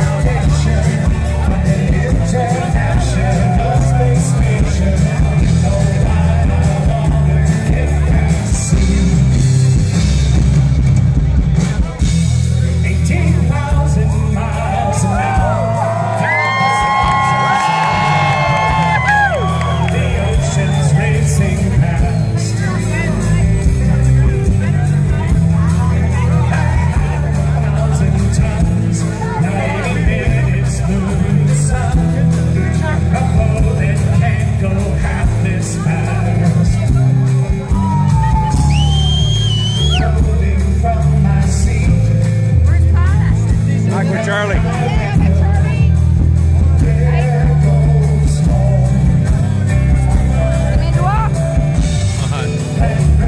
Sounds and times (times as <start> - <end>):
Male singing: 0.0 - 9.7, 12.6 - 46.0, 46.6 - 51.1, 52.2 - 53.2
Music: 0.0 - 53.2.